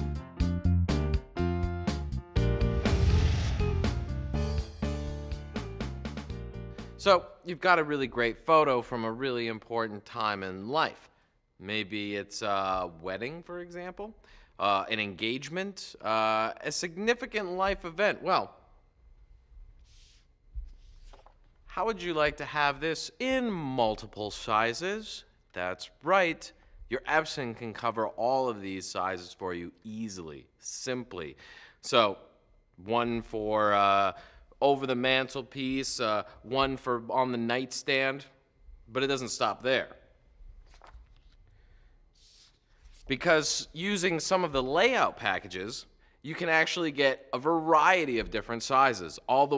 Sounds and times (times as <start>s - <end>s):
Speech: 7.0s - 18.6s, 21.7s - 40.0s, 43.1s - 49.5s.